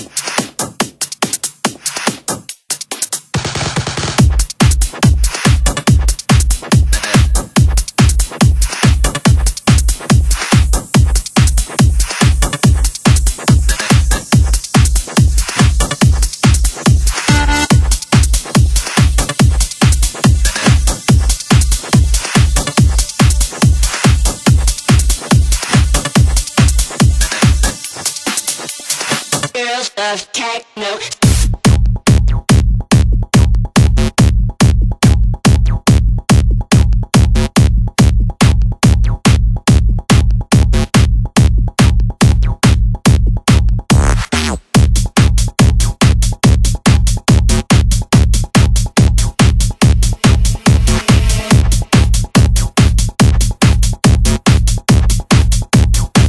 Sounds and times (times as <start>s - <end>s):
Techno: 0.0s - 56.2s.